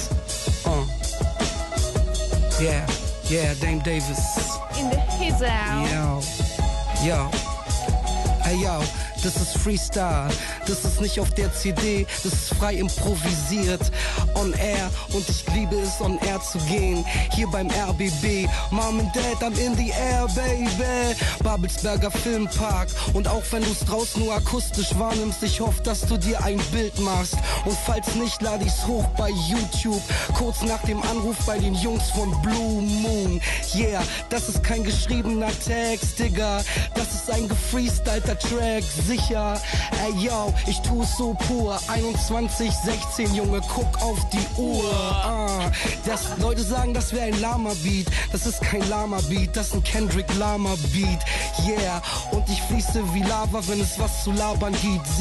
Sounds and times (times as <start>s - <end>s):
Music: 0.0s - 55.2s.